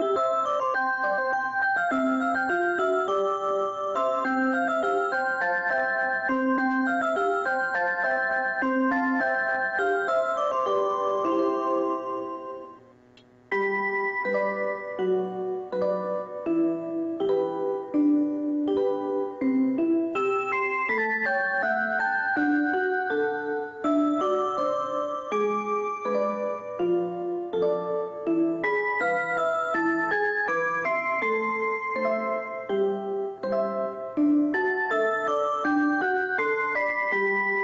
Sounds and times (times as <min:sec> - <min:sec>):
Music: 0:00.0 - 0:37.6.